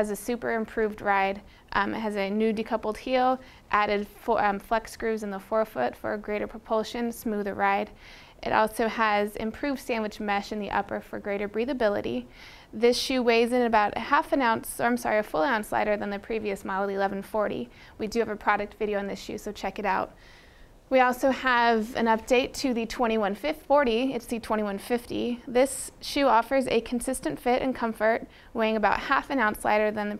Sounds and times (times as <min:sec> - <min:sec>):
Speech: 0:00.0 - 0:20.1, 0:20.9 - 0:30.1
Inside, small room: 0:00.0 - 0:30.1.